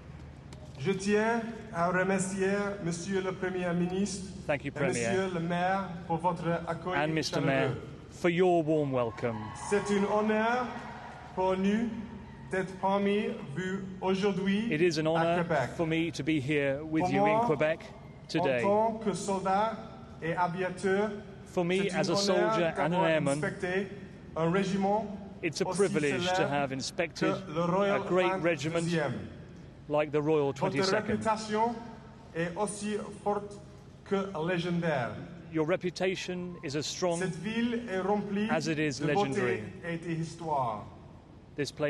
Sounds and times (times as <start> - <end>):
Narration, monologue: 0.0 - 41.8
Male speech, man speaking: 0.8 - 10.8, 11.4 - 29.3, 29.9 - 41.0, 41.6 - 41.8.